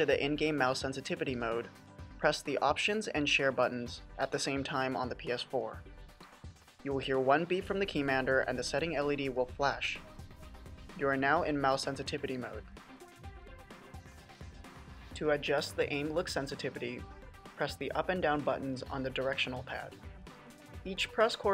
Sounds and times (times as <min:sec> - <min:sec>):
Speech: 0:00.0 - 0:05.8, 0:06.9 - 0:10.0, 0:11.0 - 0:12.6, 0:15.2 - 0:17.0, 0:17.6 - 0:19.9, 0:20.9 - 0:21.5
Music: 0:00.0 - 0:21.5.